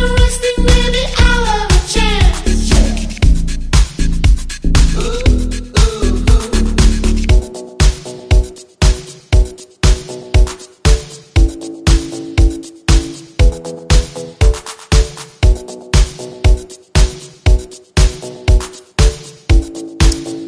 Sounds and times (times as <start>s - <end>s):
Disco: 0.0s - 20.4s.